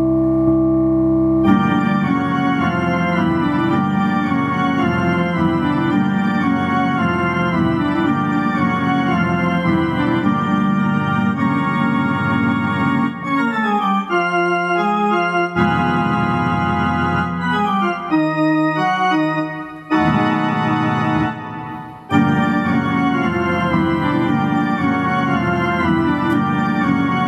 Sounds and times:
Music: 0.0s - 27.2s.

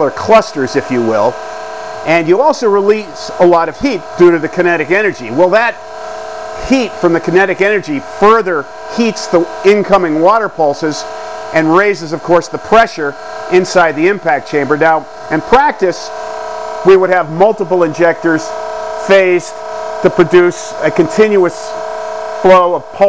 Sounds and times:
Speech: 0.0s - 1.4s, 2.1s - 5.8s, 6.6s - 11.0s, 11.6s - 16.1s, 16.9s - 21.7s, 22.4s - 23.0s.

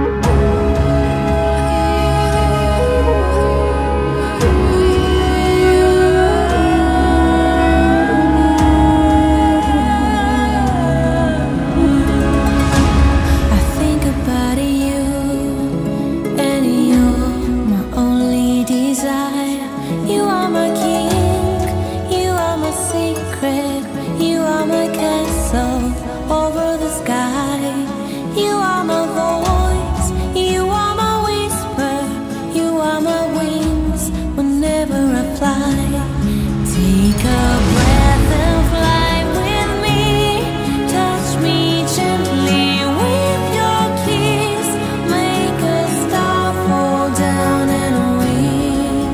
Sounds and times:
Music: 0.0s - 49.1s.

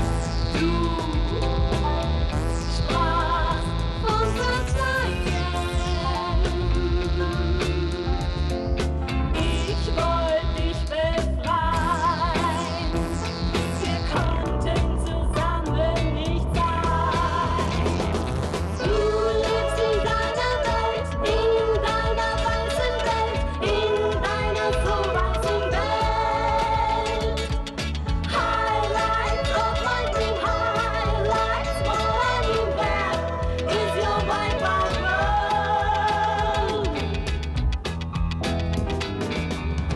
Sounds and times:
Music: 0.0s - 39.9s.

